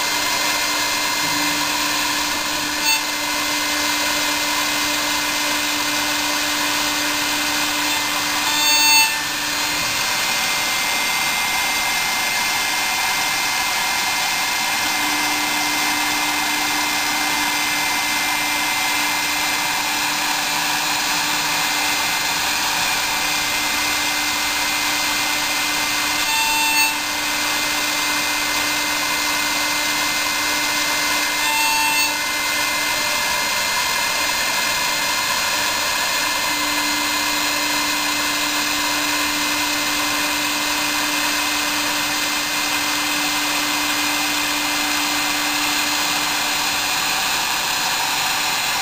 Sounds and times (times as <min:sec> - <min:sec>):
Drill: 0:00.0 - 0:48.8.